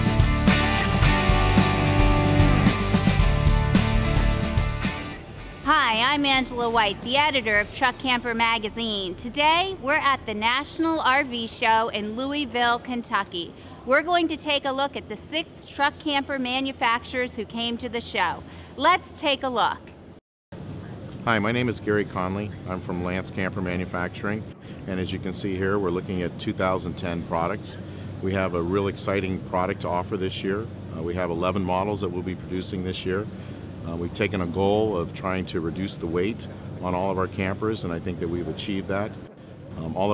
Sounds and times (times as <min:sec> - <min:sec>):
Speech: 0:21.2 - 0:33.3, 0:33.9 - 0:39.2, 0:39.8 - 0:40.1.